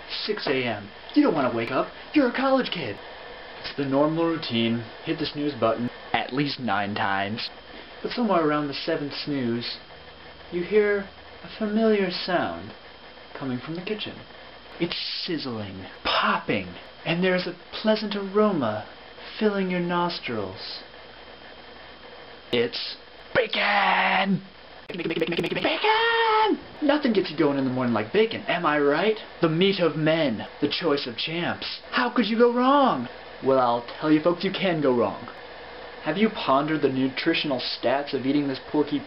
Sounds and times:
Speech: 0.1 - 3.0, 3.6 - 9.9, 10.5 - 20.9, 22.6 - 35.4, 36.0 - 39.0.

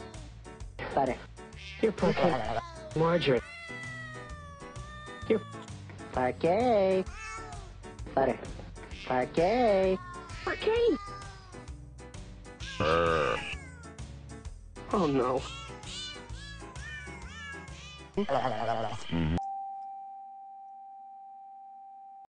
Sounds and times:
Music: 0.0 - 19.4
Meow: 1.6 - 1.9, 3.4 - 5.7, 7.1 - 7.7, 10.0 - 11.6, 12.6 - 14.0, 15.5 - 18.1
Speech: 14.9 - 15.6.

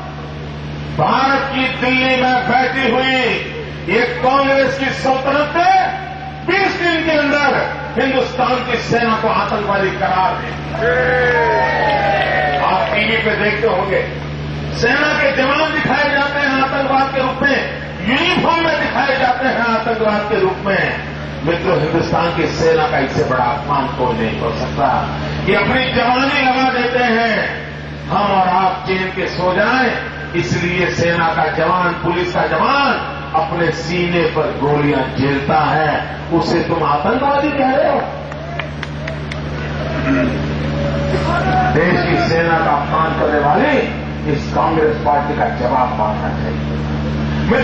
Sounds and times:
Narration, monologue: 0.0 - 10.8, 12.6 - 38.4, 41.7 - 47.6
Male speech, man speaking: 1.0 - 10.6, 12.6 - 14.2, 14.8 - 38.2, 41.3 - 46.6.

